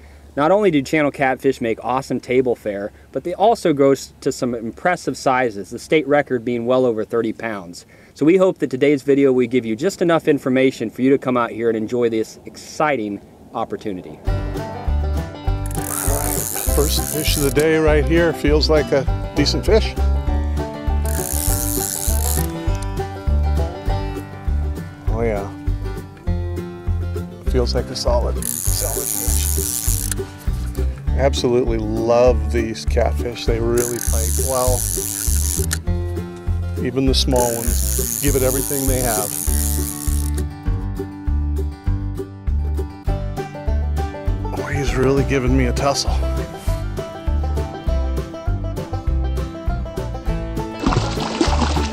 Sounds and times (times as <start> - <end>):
Speech: 0.4 - 14.2, 16.0 - 20.0, 25.1 - 25.6, 27.5 - 29.5, 31.2 - 34.8, 36.8 - 39.3, 44.6 - 46.3
Music: 14.3 - 51.9.